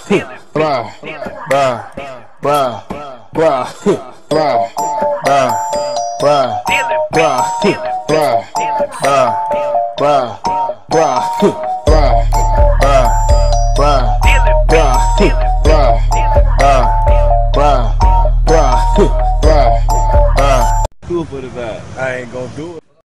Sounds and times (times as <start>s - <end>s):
Speech: 0.0s - 4.1s, 20.4s - 23.0s
Music: 4.3s - 20.9s.